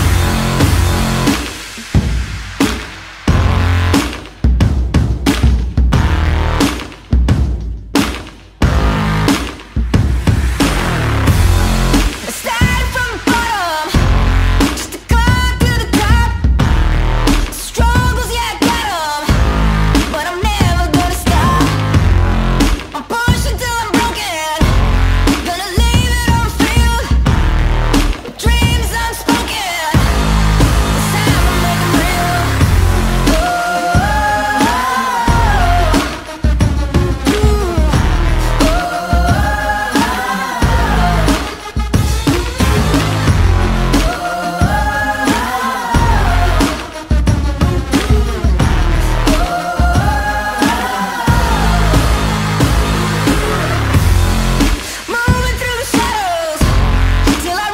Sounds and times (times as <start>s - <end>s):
Music: 0.0s - 57.7s.